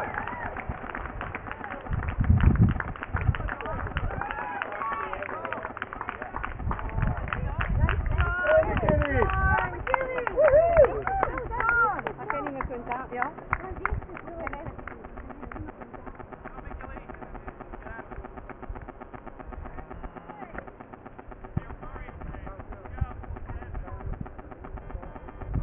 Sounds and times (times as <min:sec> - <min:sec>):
Outside, rural or natural: 0:00.0 - 0:25.6
Run: 0:00.0 - 0:25.6.